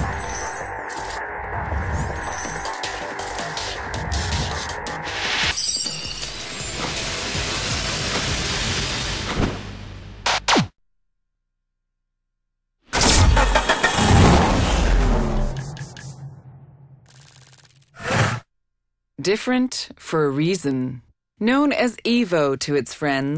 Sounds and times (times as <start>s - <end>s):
Car: 13.0s - 16.2s.